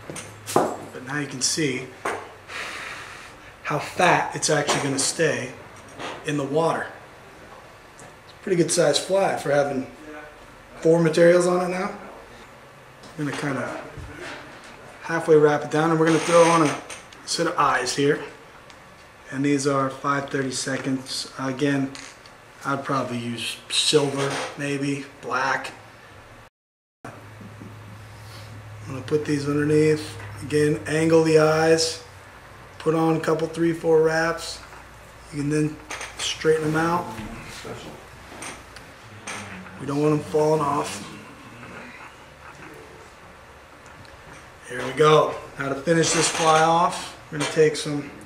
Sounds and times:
Speech: 0:01.0 - 0:02.0, 0:03.7 - 0:05.6, 0:06.3 - 0:07.0, 0:08.4 - 0:12.4, 0:13.2 - 0:14.4, 0:15.0 - 0:18.4, 0:19.3 - 0:22.0, 0:22.6 - 0:25.8, 0:28.9 - 0:32.1, 0:32.8 - 0:34.7, 0:35.3 - 0:38.0, 0:39.5 - 0:41.8, 0:44.6 - 0:48.2.

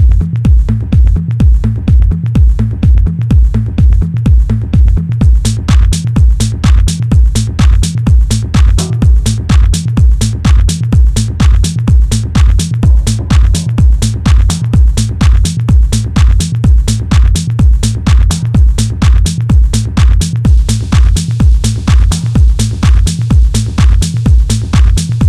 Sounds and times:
Music: 0:00.0 - 0:25.2.

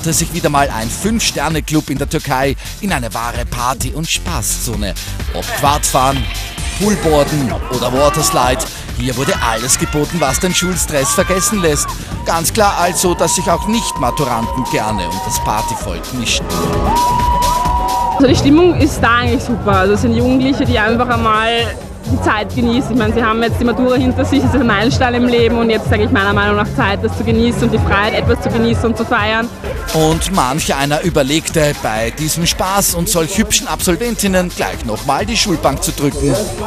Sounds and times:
Speech: 0:00.0 - 0:16.5, 0:18.2 - 0:36.6
Music: 0:00.0 - 0:36.6.

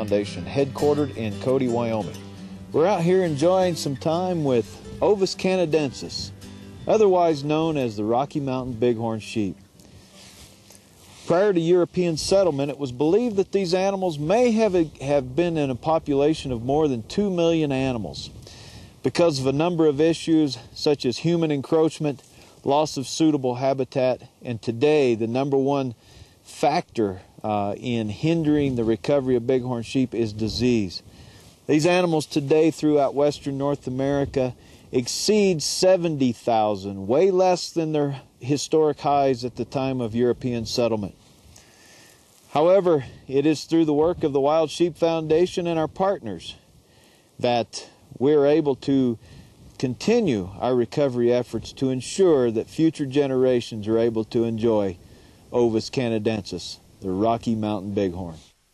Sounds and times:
Speech: 0:00.0 - 0:09.6, 0:11.2 - 0:18.3, 0:19.0 - 0:31.1, 0:31.7 - 0:41.2, 0:42.5 - 0:46.6, 0:47.4 - 0:49.2, 0:49.8 - 0:58.5.

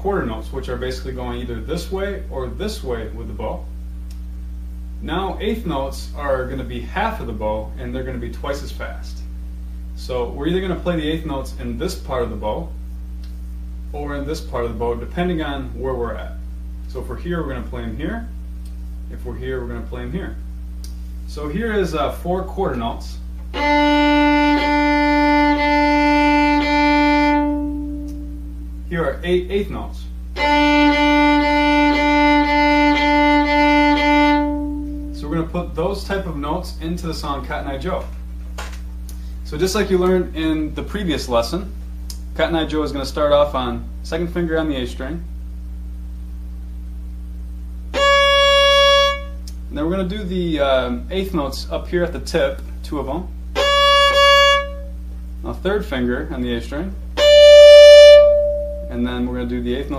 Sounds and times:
Speech: 0:00.0 - 0:03.7, 0:05.0 - 0:09.3, 0:10.0 - 0:12.8, 0:13.9 - 0:18.4, 0:19.1 - 0:20.5, 0:21.3 - 0:23.3, 0:28.9 - 0:30.2, 0:35.2 - 0:38.2, 0:39.4 - 0:41.8, 0:42.4 - 0:45.4, 0:49.7 - 0:53.4, 0:55.4 - 0:57.0, 0:58.9 - 0:59.9
Violin, fiddle: 0:23.6 - 0:28.3, 0:30.4 - 0:35.2, 0:48.0 - 0:49.3, 0:53.6 - 0:54.8, 0:57.2 - 0:58.9.

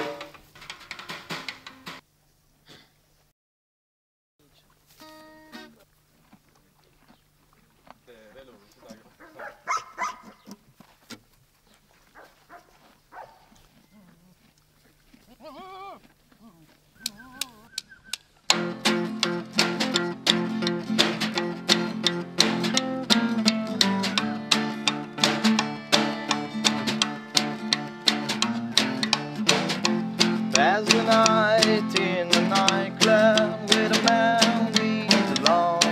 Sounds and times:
Speech: 0:08.0 - 0:09.5.

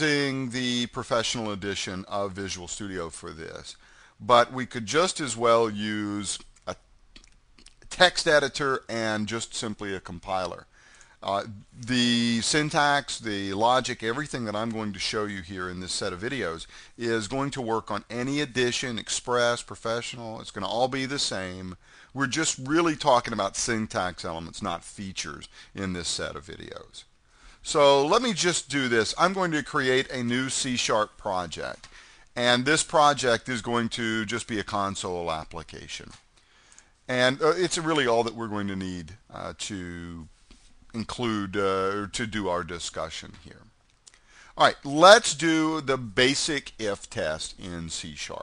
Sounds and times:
Speech: 0:00.0 - 0:06.8, 0:07.8 - 0:36.2, 0:37.1 - 0:40.3, 0:40.9 - 0:43.8, 0:44.6 - 0:48.4.

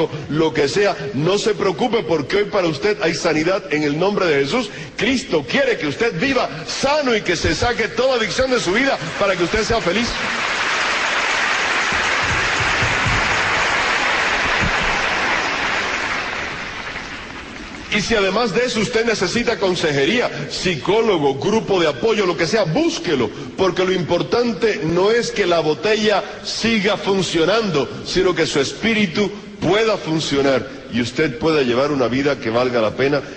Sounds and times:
Speech: 0:00.0 - 0:10.3, 0:17.9 - 0:33.3.

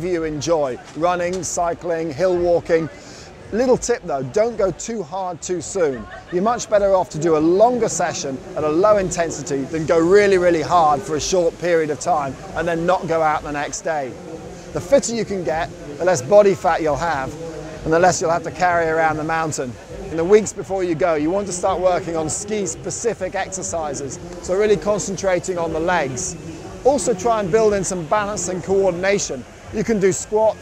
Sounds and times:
Speech: 0:00.0 - 0:30.6.

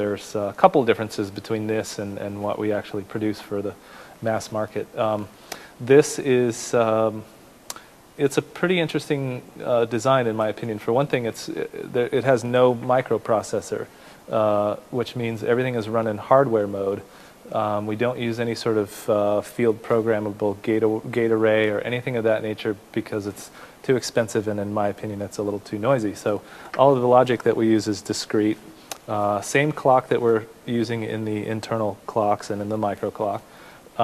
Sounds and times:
Speech: 0:00.0 - 0:07.3, 0:08.2 - 0:34.0
Inside, small room: 0:00.0 - 0:34.0.

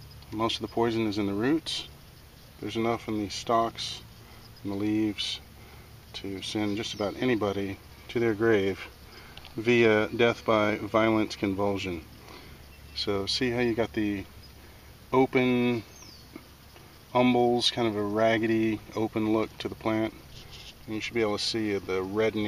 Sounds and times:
Speech: 0:00.3 - 0:01.9, 0:02.6 - 0:04.0, 0:04.6 - 0:05.4, 0:06.1 - 0:08.9, 0:09.6 - 0:12.1, 0:13.0 - 0:14.3, 0:15.2 - 0:15.9, 0:17.1 - 0:20.2, 0:20.9 - 0:22.4.

